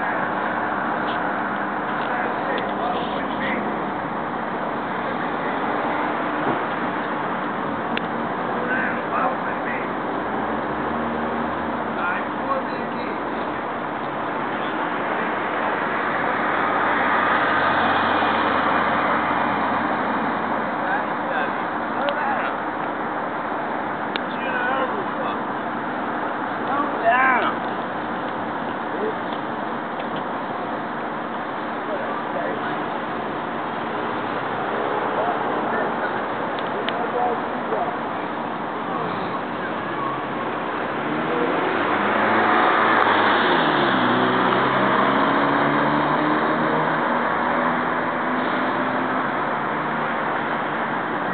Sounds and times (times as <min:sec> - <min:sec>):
Engine: 0:00.0 - 0:51.3
Speech: 0:02.0 - 0:03.8, 0:08.5 - 0:10.0, 0:12.0 - 0:13.7, 0:20.8 - 0:22.6, 0:24.2 - 0:25.5, 0:26.6 - 0:27.6, 0:31.8 - 0:32.9, 0:35.1 - 0:38.1, 0:38.8 - 0:40.3.